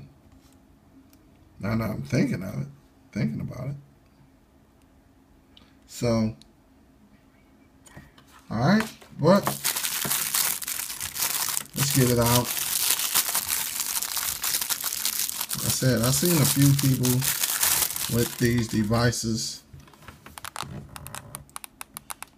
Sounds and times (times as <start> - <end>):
Inside, small room: 0.0 - 22.3
Speech: 1.6 - 3.8, 5.9 - 6.5, 8.5 - 9.6, 11.8 - 12.5, 15.6 - 17.4, 18.1 - 19.7
Crumpling, crinkling: 9.4 - 19.2, 20.4 - 22.3.